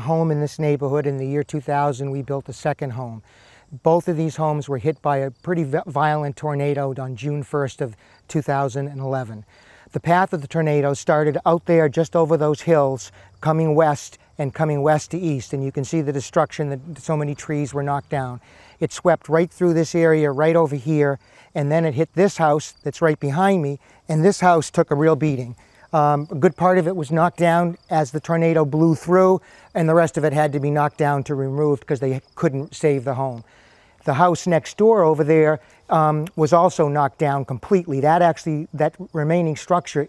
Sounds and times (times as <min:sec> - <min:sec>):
Speech: 0:00.0 - 0:03.2, 0:03.8 - 0:33.4, 0:34.0 - 0:40.0.